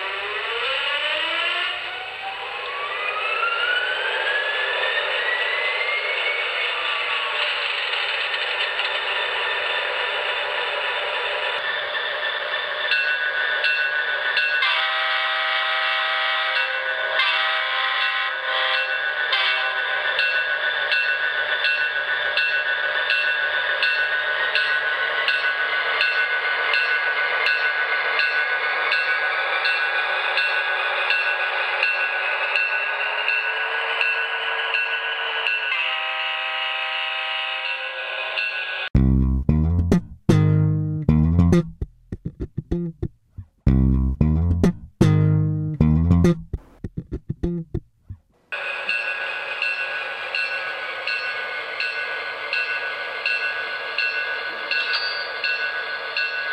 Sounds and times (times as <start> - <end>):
Music: 39.0 - 47.8.